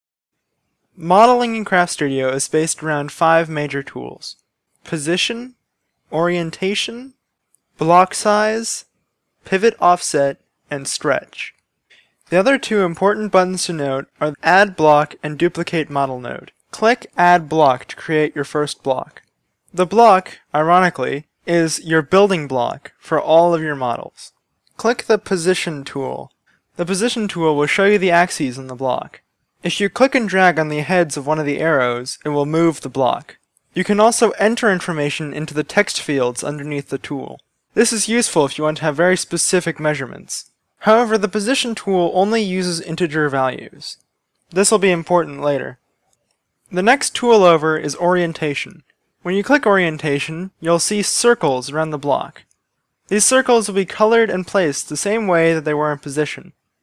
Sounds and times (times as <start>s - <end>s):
Speech: 1.0s - 7.1s, 7.8s - 8.9s, 9.5s - 11.6s, 12.3s - 19.2s, 19.8s - 45.8s, 46.7s - 52.4s, 53.1s - 56.6s.